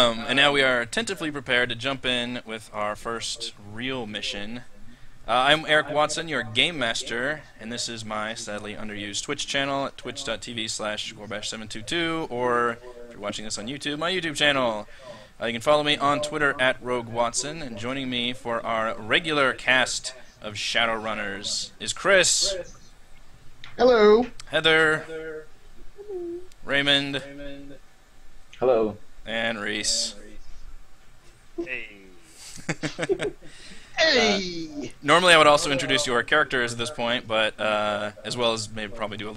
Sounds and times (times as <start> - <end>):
Speech: 0.0 - 22.8, 23.8 - 27.8, 28.6 - 30.4, 34.0 - 39.3.